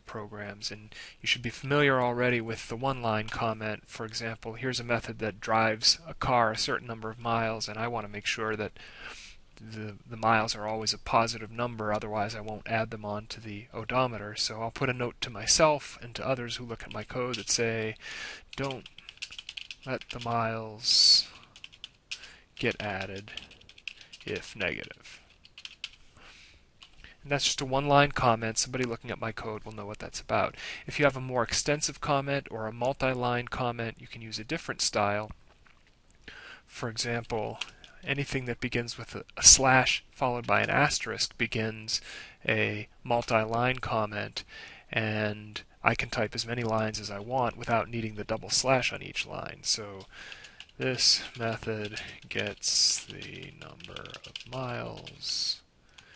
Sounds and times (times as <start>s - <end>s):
Speech: 0.0s - 8.7s, 9.6s - 18.0s, 18.6s - 18.9s, 19.9s - 21.4s, 22.6s - 23.4s, 24.2s - 25.2s, 27.2s - 35.4s, 36.7s - 50.1s, 50.8s - 55.7s.